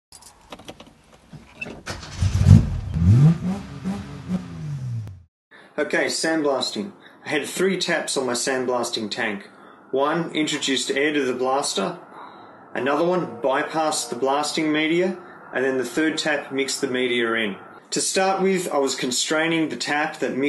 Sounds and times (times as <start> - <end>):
Car: 0.2 - 5.2
Speech: 5.8 - 12.0, 12.8 - 20.4.